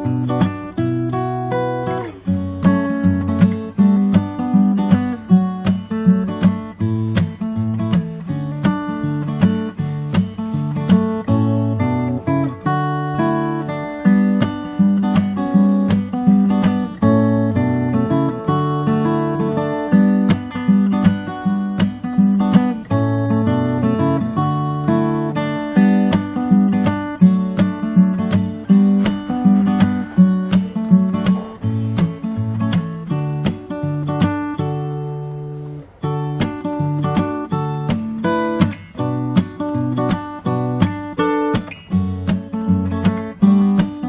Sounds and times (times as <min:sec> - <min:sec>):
Acoustic guitar: 0:00.0 - 0:44.0
Strum: 0:00.0 - 0:44.0.